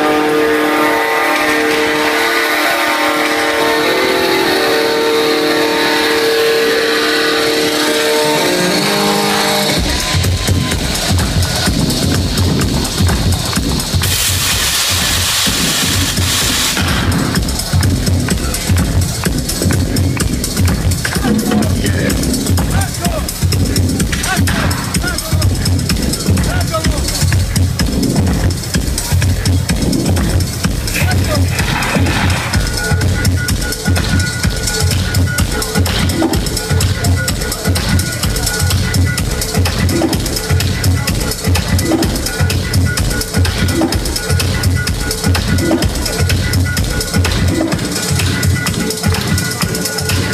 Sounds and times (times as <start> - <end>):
Disco: 9.0 - 50.3.